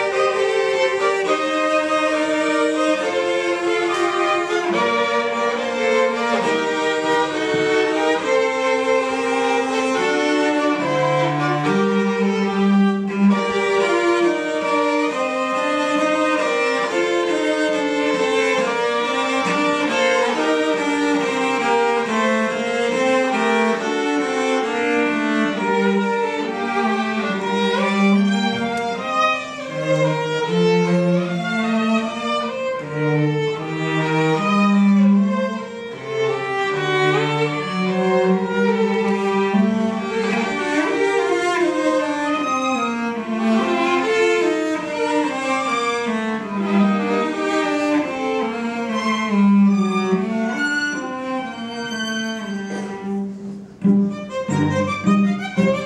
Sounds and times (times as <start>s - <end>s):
Cello: 0.0s - 55.8s
Violin, fiddle: 0.0s - 55.8s.